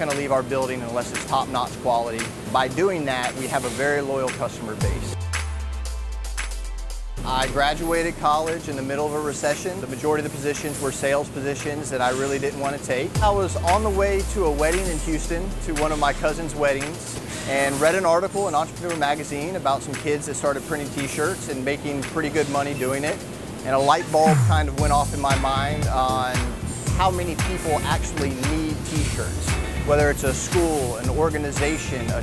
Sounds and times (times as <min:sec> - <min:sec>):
Speech: 0:00.0 - 0:05.2, 0:07.2 - 0:32.2
Music: 0:00.0 - 0:32.2.